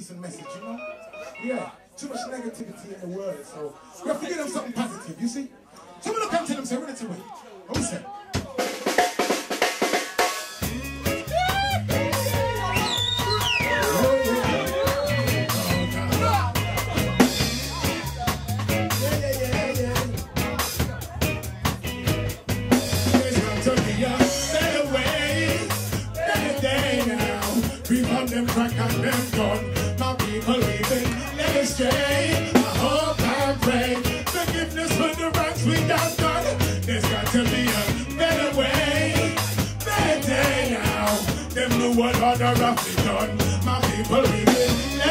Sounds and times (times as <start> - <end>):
Speech: 0.0 - 8.8, 15.6 - 21.8
Drum roll: 8.4 - 45.1.